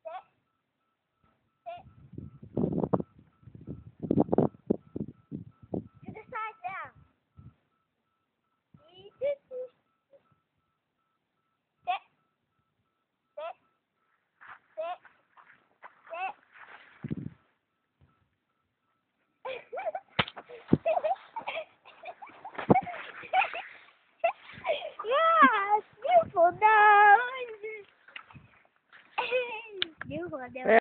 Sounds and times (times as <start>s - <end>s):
Speech: 25.0s - 27.8s.